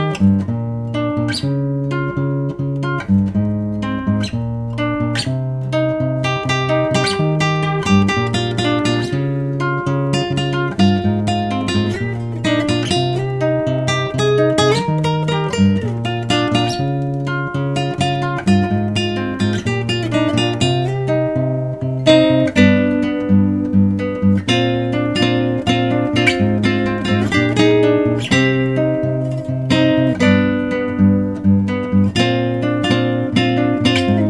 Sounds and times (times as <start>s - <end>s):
Acoustic guitar: 0.0s - 34.3s
Strum: 0.0s - 34.3s.